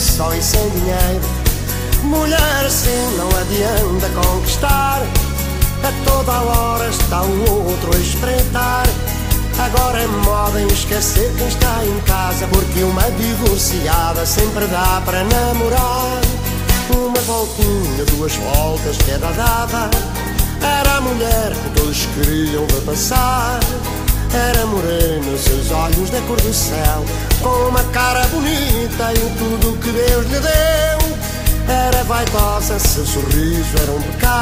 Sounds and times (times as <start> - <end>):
Music: 0.0 - 34.4.